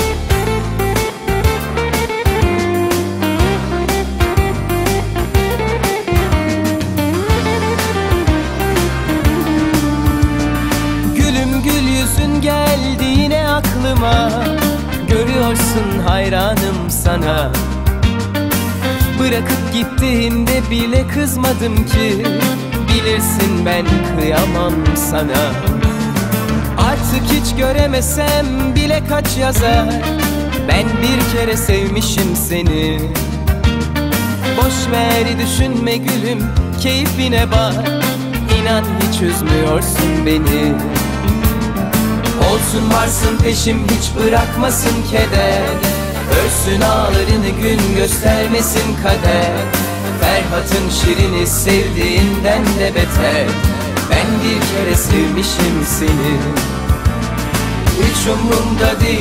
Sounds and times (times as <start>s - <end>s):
Music: 0.0s - 59.2s.